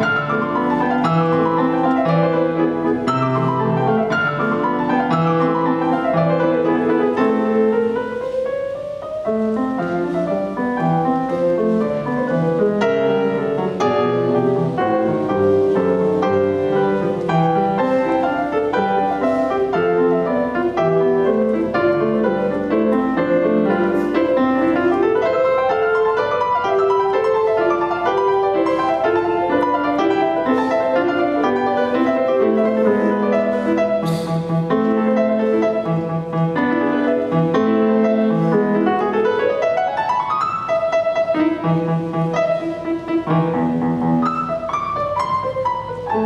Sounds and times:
Piano: 0.0 - 46.2.

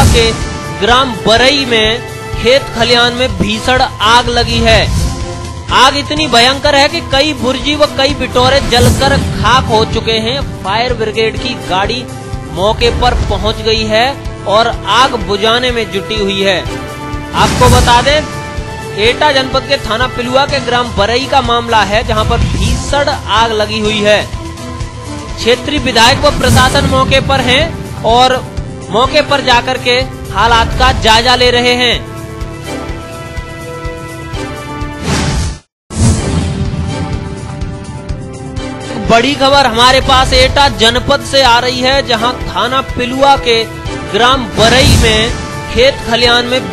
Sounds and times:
Speech: 0.0 - 4.9, 5.7 - 16.7, 17.4 - 18.3, 19.0 - 24.3, 25.4 - 32.0, 39.0 - 46.7
Music: 0.0 - 46.7.

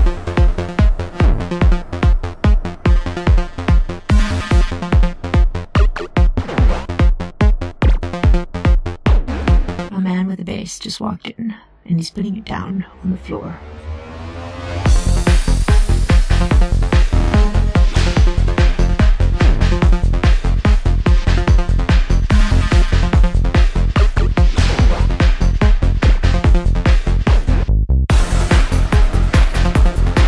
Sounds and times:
Trance music: 0.0 - 10.0, 11.8 - 30.2.

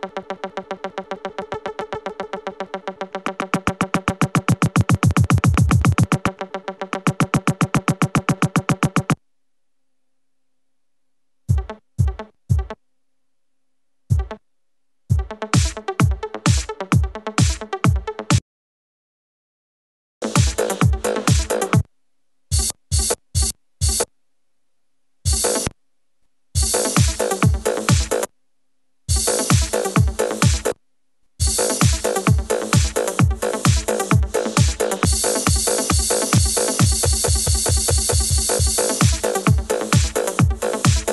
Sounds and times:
Electronic music: 0.0 - 9.2, 20.2 - 21.8, 22.5 - 24.1, 25.3 - 25.7, 26.6 - 28.3, 29.1 - 30.8, 31.4 - 41.1
Synthesizer: 0.0 - 9.2, 20.2 - 21.9, 25.3 - 25.8, 26.6 - 28.3, 29.1 - 30.8, 31.4 - 41.1.

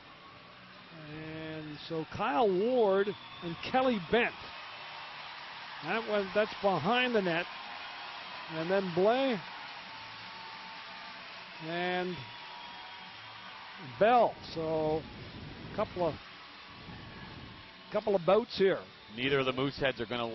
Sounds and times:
Speech: 1.0 - 4.4, 5.8 - 7.4, 8.5 - 9.4, 11.6 - 12.2, 13.9 - 15.0, 15.8 - 16.2, 18.0 - 20.3.

